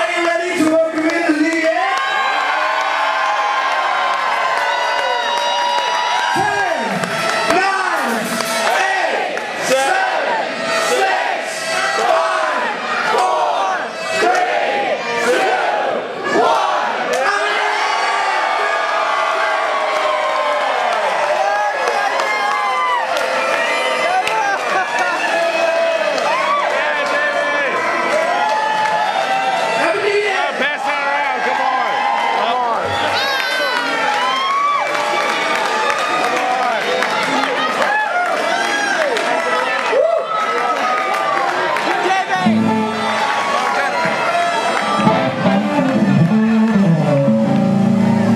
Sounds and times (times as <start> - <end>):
Cheering: 0.0 - 48.3
Crowd: 0.0 - 48.3.